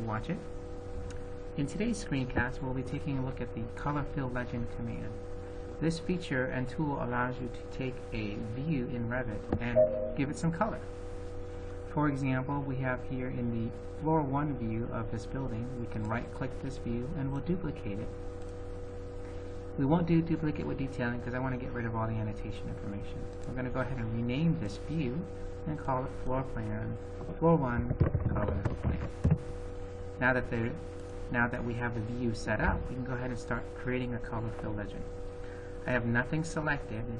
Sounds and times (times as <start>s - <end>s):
Speech: 0.0s - 0.5s, 1.6s - 5.2s, 5.8s - 10.9s, 11.9s - 18.2s, 19.8s - 29.2s, 30.2s - 35.1s, 35.8s - 37.1s.